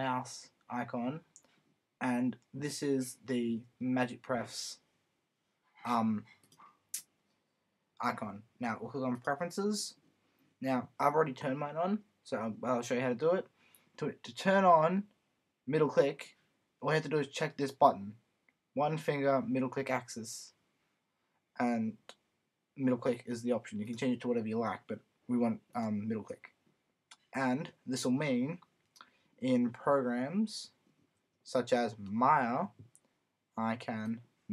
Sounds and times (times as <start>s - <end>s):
Speech: 0.0s - 1.4s, 2.0s - 4.8s, 5.8s - 6.3s, 8.0s - 10.0s, 10.6s - 15.1s, 15.7s - 18.2s, 18.8s - 20.6s, 21.6s - 22.2s, 22.8s - 28.6s, 29.4s - 30.8s, 31.4s - 32.8s, 33.6s - 34.5s.